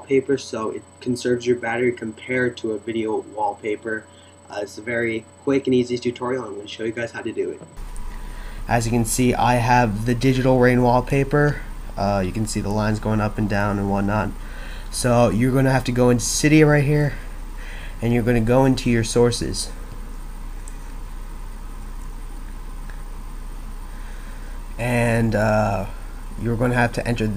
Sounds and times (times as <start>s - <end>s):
Speech: 0.0s - 7.7s, 8.7s - 17.2s, 18.0s - 19.8s, 24.8s - 27.3s.